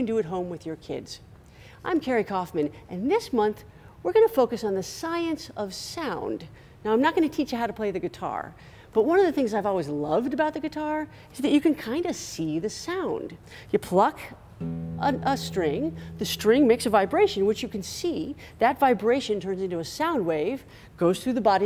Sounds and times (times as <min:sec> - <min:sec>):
Speech: 0:00.0 - 0:01.2, 0:01.8 - 0:14.4, 0:15.0 - 0:21.6
Music: 0:14.6 - 0:18.6.